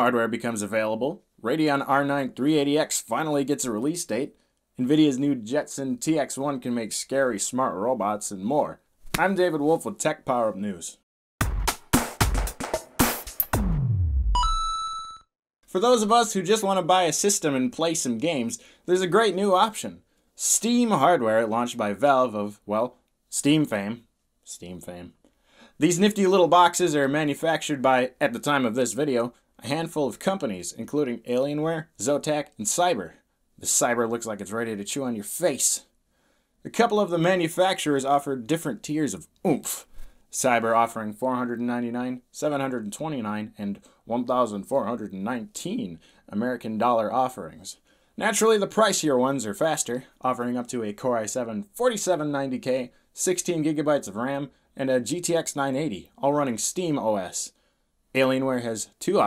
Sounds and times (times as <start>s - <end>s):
Speech: 0.0s - 11.0s, 15.7s - 25.2s, 25.8s - 35.9s, 36.6s - 59.2s.